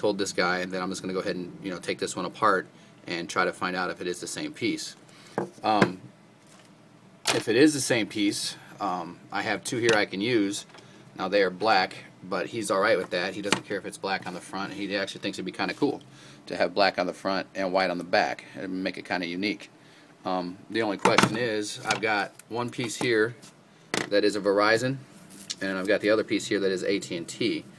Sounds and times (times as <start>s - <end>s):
Speech: 0.0s - 5.0s, 5.6s - 6.0s, 7.3s - 23.4s, 24.1s - 27.7s.